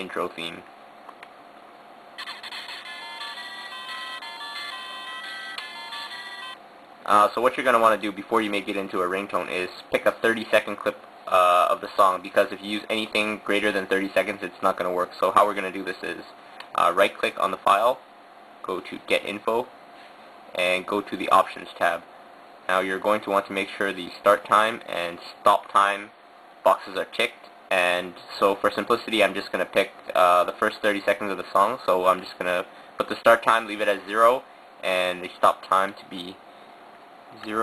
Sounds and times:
Speech: 0.0s - 0.7s, 7.0s - 18.0s, 18.6s - 19.7s, 20.5s - 22.1s, 22.7s - 36.4s, 37.4s - 37.6s
Music: 2.2s - 6.6s.

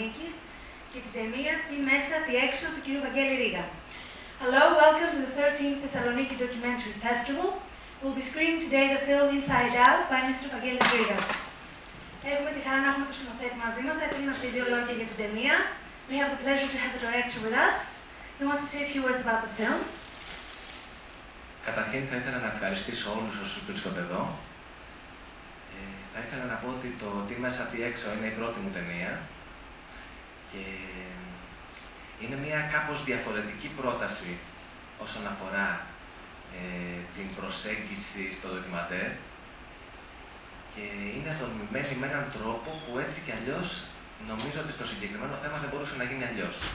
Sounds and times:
Speech: 0.0s - 3.8s, 4.4s - 11.4s, 12.2s - 20.0s, 21.6s - 24.5s, 25.7s - 29.3s, 32.2s - 34.4s, 36.5s - 39.2s, 40.7s - 46.7s.

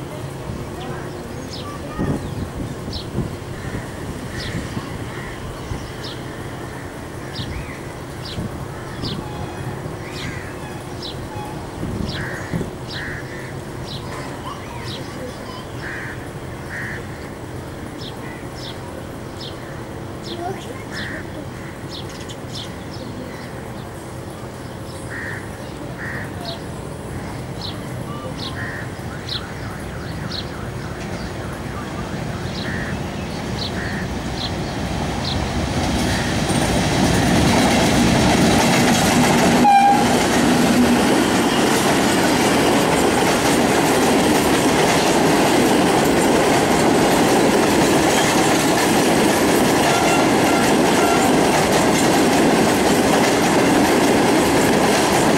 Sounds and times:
Railroad car, train wagon: 0.0s - 55.3s
Clickety-clack: 35.9s - 55.3s
Train horn: 39.6s - 40.5s, 49.8s - 51.6s.

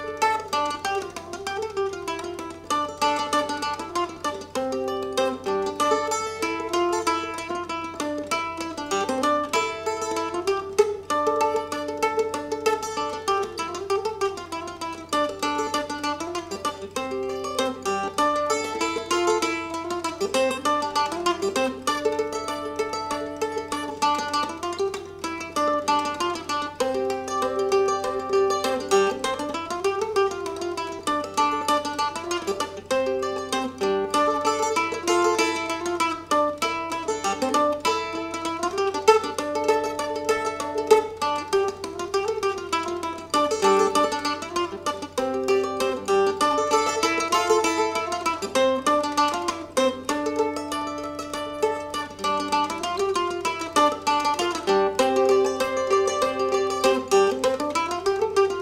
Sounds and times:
Mandolin: 0.0s - 58.6s.

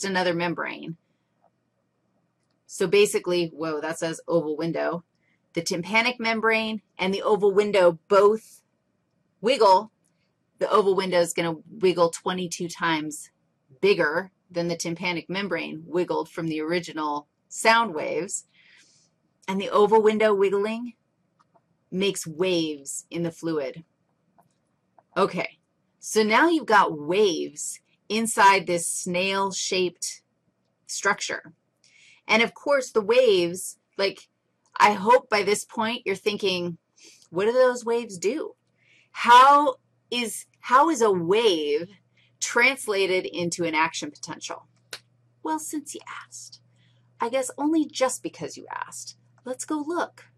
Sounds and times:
Narration, monologue: 0.0s - 50.3s.

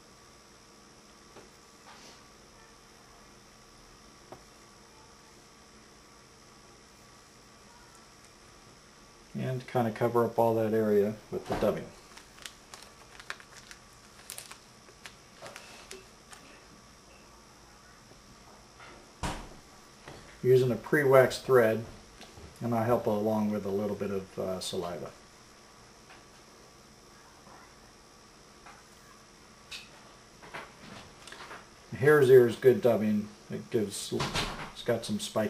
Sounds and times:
Speech: 9.3s - 12.0s, 20.4s - 22.0s, 22.6s - 25.2s, 31.9s - 35.4s.

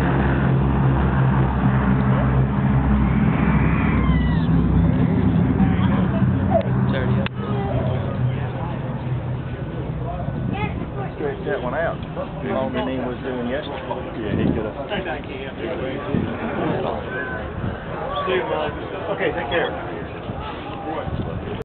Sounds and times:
Speech: 9.9s - 21.6s.

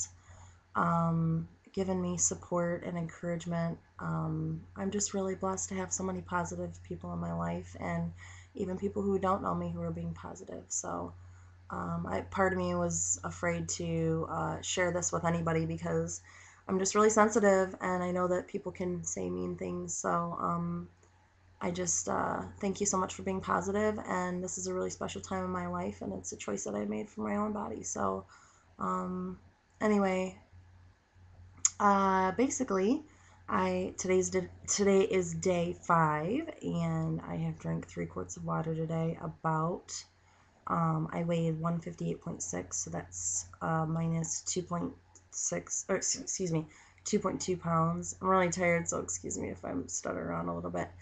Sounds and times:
Speech: 0.8s - 11.1s, 11.7s - 20.9s, 21.6s - 30.4s, 31.7s - 40.0s, 40.7s - 51.0s.

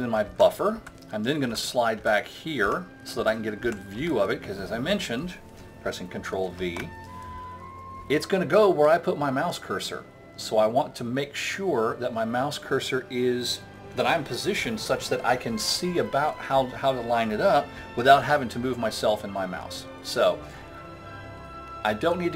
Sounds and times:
Speech: 0.0s - 7.0s, 8.1s - 20.5s, 21.8s - 22.3s.

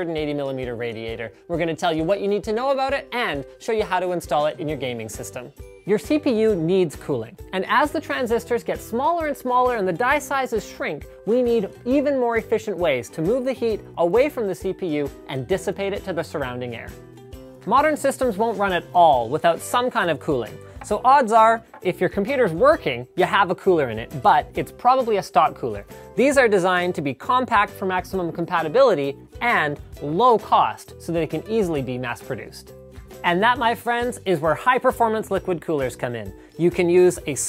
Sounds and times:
Speech: 0.0s - 17.0s, 17.6s - 37.4s
Music: 0.0s - 37.4s.

